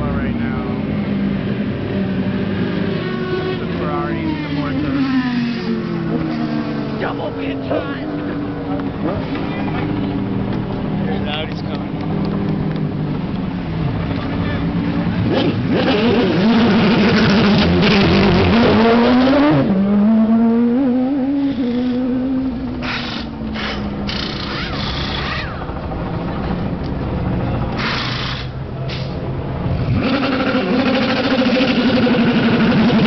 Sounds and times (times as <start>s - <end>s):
Outside, urban or manmade: 0.0s - 33.0s
Race car, auto racing: 0.0s - 33.0s.